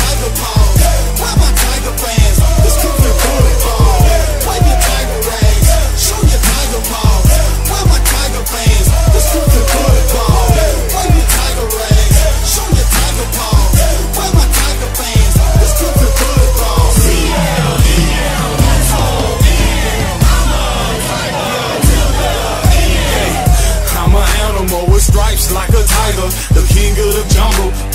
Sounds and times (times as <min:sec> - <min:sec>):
Music: 0:00.0 - 0:27.9.